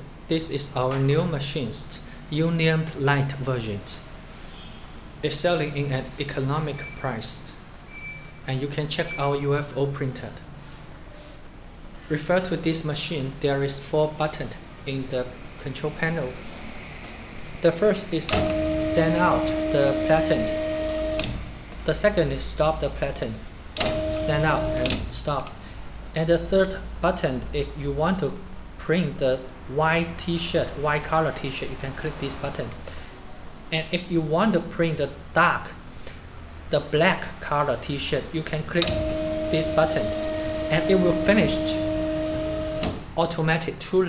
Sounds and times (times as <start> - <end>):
Speech: 0.0 - 4.1, 5.2 - 7.6, 8.5 - 10.5, 12.1 - 16.4, 17.6 - 20.5, 21.8 - 23.4, 24.2 - 25.6, 26.2 - 32.8, 33.7 - 35.8, 36.7 - 40.1, 40.7 - 41.8, 43.2 - 44.0.